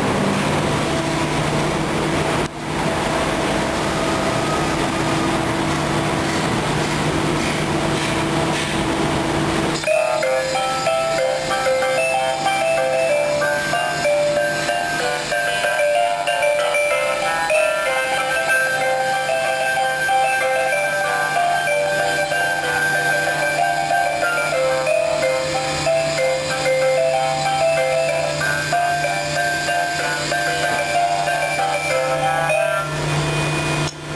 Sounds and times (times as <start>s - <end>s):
Music: 9.8s - 34.0s.